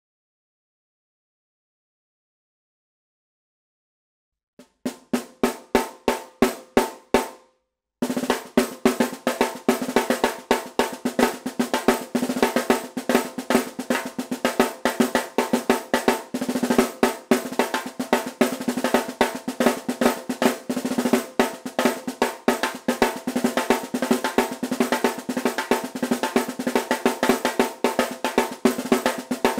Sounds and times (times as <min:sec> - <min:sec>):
Drum roll: 0:04.6 - 0:07.4, 0:08.0 - 0:29.5.